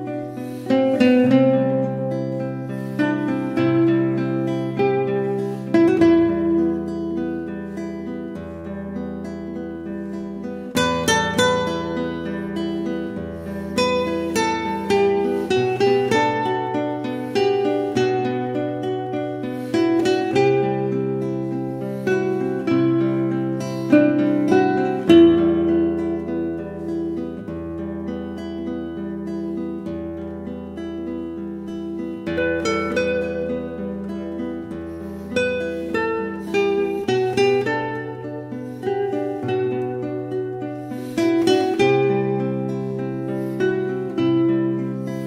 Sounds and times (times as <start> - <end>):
Acoustic guitar: 0.0 - 45.2
Strum: 0.0 - 45.2.